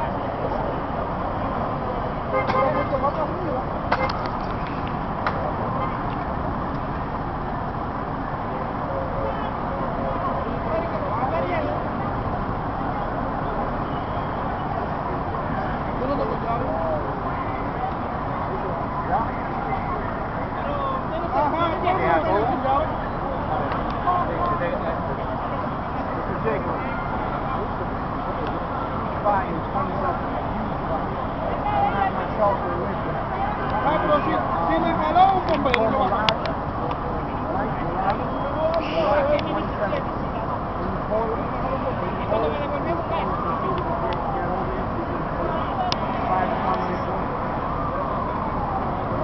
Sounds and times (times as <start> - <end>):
Speech: 14.9 - 49.2.